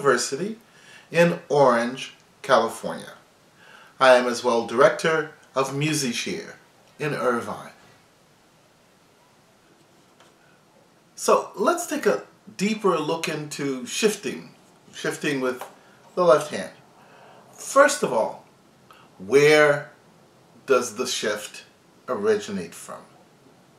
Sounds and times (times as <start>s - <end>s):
Speech: 0.0s - 3.2s, 4.0s - 7.8s, 11.2s - 16.8s, 17.6s - 18.5s, 19.2s - 20.0s, 20.7s - 23.2s.